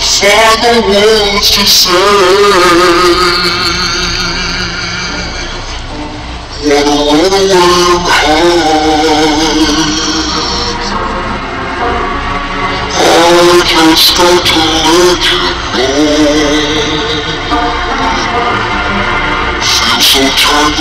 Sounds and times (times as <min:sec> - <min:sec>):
Male singing: 0:00.0 - 0:05.8, 0:06.5 - 0:11.0, 0:12.9 - 0:19.0, 0:19.6 - 0:20.8
Synthetic singing: 0:00.0 - 0:05.8, 0:06.5 - 0:10.9, 0:12.9 - 0:18.5, 0:19.6 - 0:20.8
Music: 0:00.0 - 0:20.8.